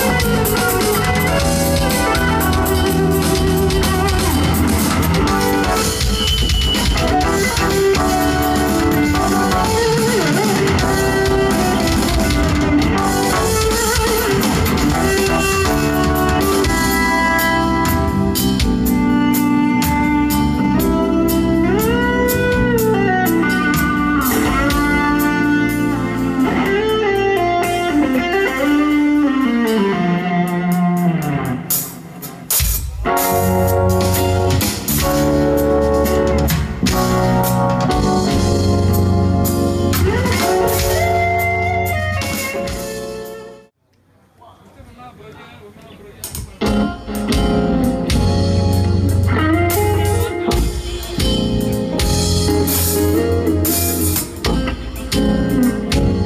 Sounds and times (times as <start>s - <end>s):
Music: 0.0s - 43.8s, 46.3s - 56.2s.